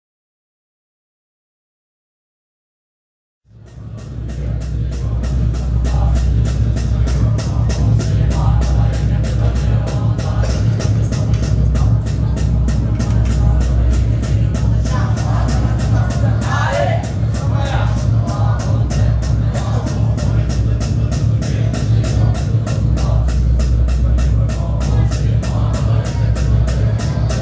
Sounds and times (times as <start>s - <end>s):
Chant: 3.6s - 27.4s.